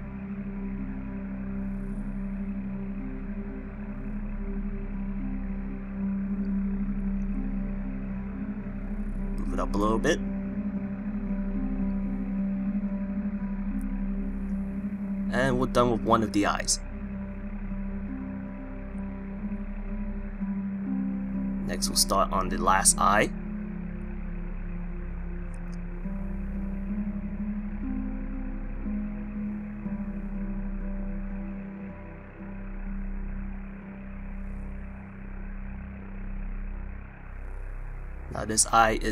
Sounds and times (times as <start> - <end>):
Music: 0.0 - 39.1
Speech: 9.4 - 10.2, 15.3 - 16.8, 21.7 - 23.3, 38.4 - 39.1.